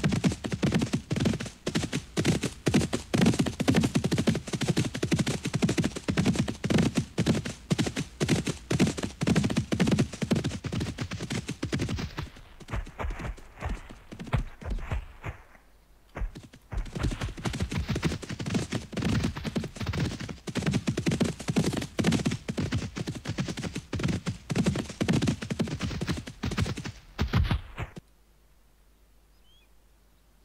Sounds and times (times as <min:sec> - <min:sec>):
Clip-clop: 0:00.0 - 0:28.0.